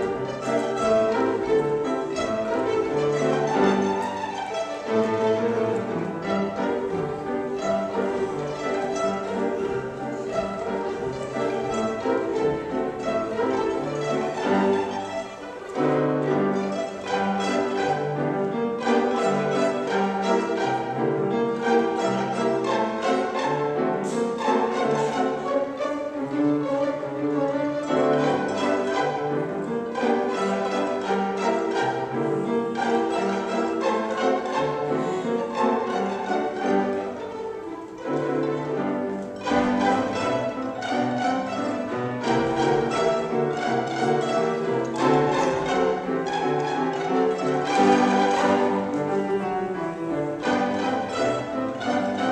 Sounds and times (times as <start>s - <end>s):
Violin, fiddle: 0.0s - 52.3s.